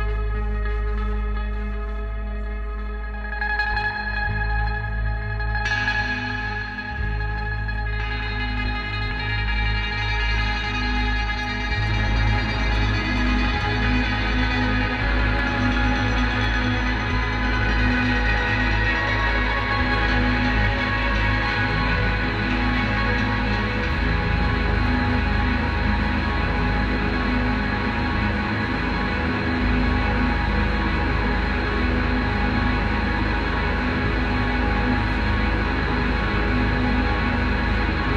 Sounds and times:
Music: 0:00.0 - 0:38.1.

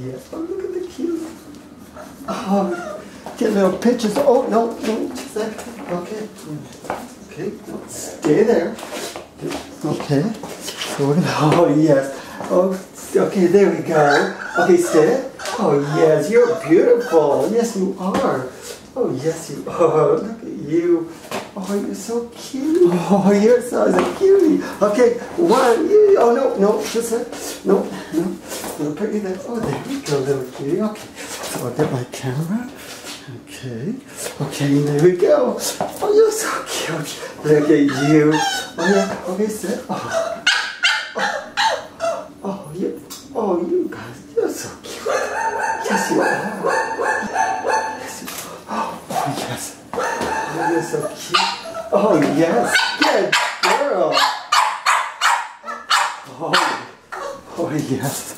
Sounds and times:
Speech: 0:00.0 - 0:01.5, 0:02.3 - 0:08.8, 0:09.4 - 0:40.3, 0:42.4 - 0:45.0, 0:45.8 - 0:46.8, 0:47.9 - 0:49.8, 0:50.5 - 0:54.3, 0:56.3 - 0:58.3.

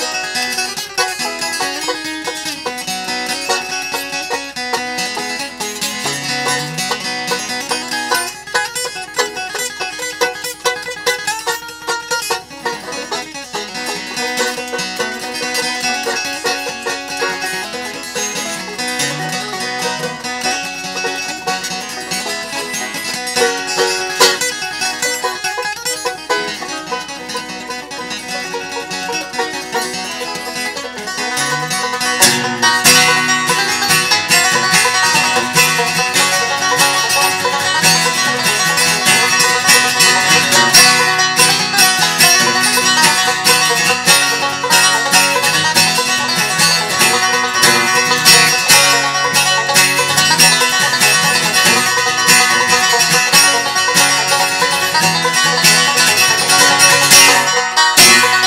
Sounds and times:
Acoustic guitar: 0:00.0 - 0:58.4
Banjo: 0:00.0 - 0:58.4
Bluegrass: 0:00.0 - 0:58.4.

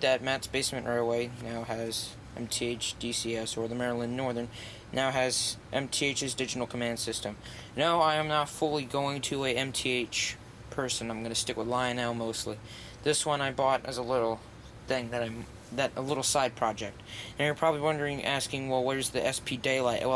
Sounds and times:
Speech: 0:00.0 - 0:20.1.

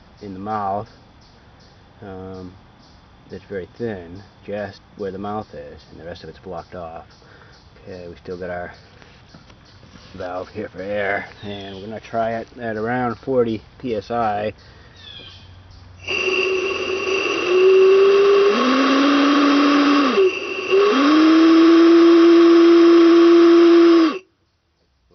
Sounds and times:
Speech: 0:00.2 - 0:00.9, 0:02.0 - 0:02.6, 0:03.3 - 0:07.1, 0:07.8 - 0:08.8, 0:10.1 - 0:14.6.

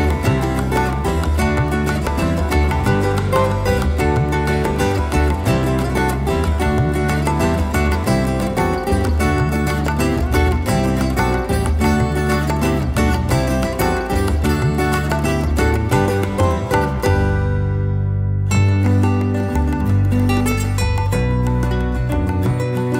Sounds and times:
Music: 0:00.0 - 0:23.0.

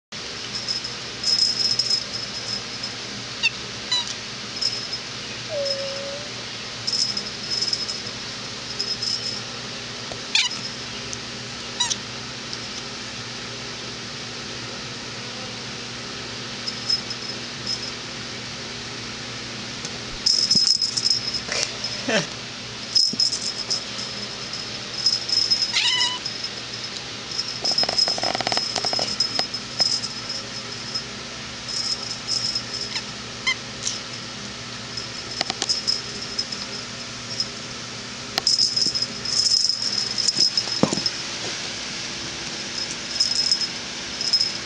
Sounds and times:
Meow: 0:05.5 - 0:06.4, 0:10.4 - 0:10.6, 0:11.8 - 0:12.0, 0:25.7 - 0:26.2.

